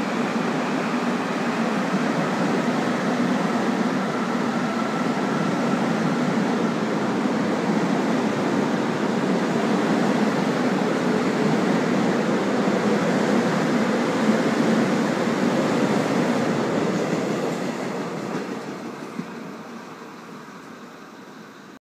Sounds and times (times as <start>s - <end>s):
Railroad car, train wagon: 0.0s - 21.8s
Subway, metro, underground: 0.0s - 21.8s
Train: 0.0s - 21.8s.